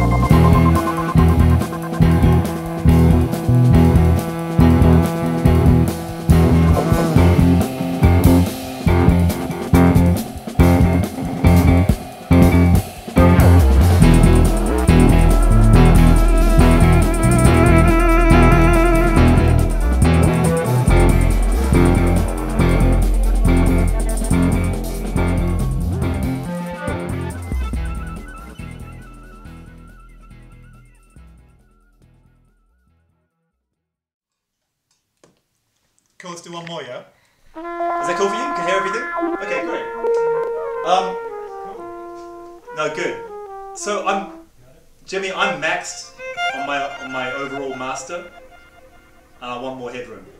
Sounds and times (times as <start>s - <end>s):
Bass guitar: 0.0s - 32.7s.